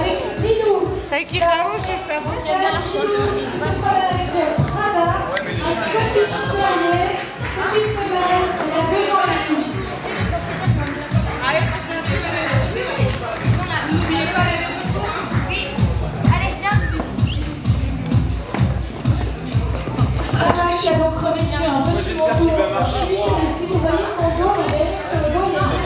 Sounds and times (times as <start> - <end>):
Music: 0.0 - 25.8.